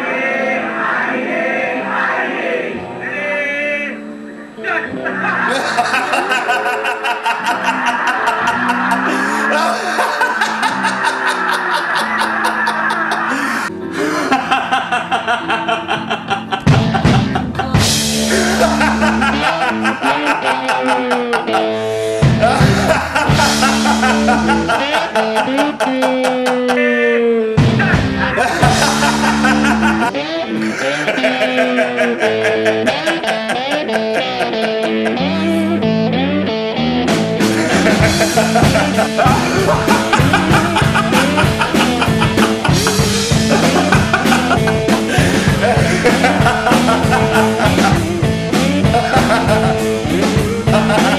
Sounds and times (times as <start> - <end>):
Rock and roll: 4.6 - 51.1.